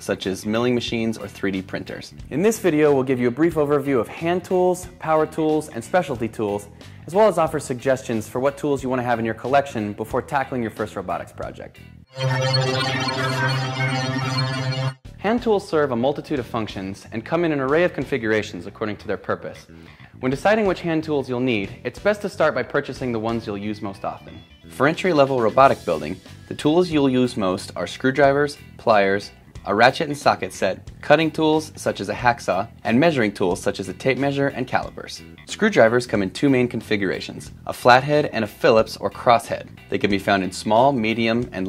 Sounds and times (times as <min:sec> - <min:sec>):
Speech: 0:00.0 - 0:11.8, 0:15.2 - 0:41.6
Music: 0:00.0 - 0:41.6.